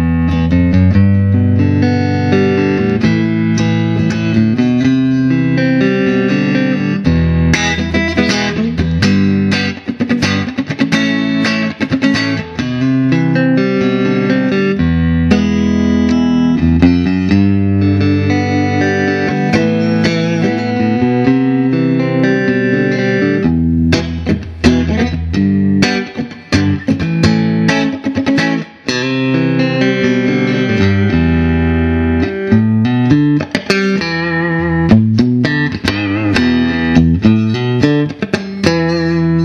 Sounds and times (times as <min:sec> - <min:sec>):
Electric guitar: 0:00.0 - 0:39.4
Electronic tuner: 0:00.0 - 0:39.4.